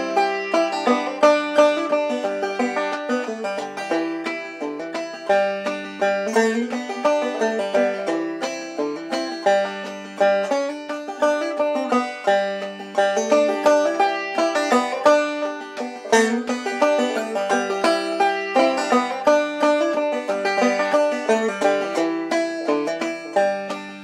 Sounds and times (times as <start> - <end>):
Banjo: 0.0 - 24.0.